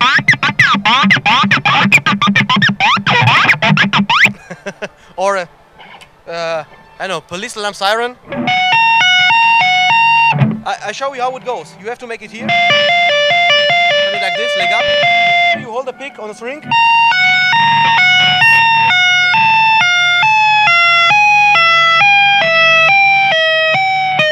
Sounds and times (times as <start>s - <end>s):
Guitar: 0.0s - 4.4s, 5.7s - 7.5s, 8.2s - 24.3s
Speech: 6.3s - 8.2s, 10.7s - 12.5s, 14.1s - 14.9s, 15.6s - 16.6s.